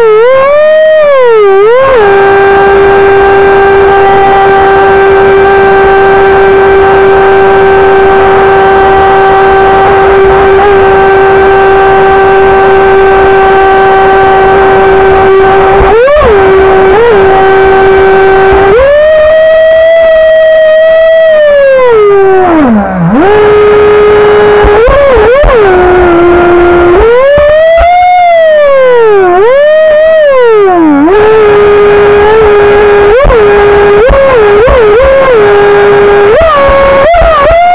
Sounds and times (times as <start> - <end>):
Motorboat, speedboat: 0.7 - 1.0, 2.0 - 18.7, 23.3 - 28.2, 31.2 - 37.7.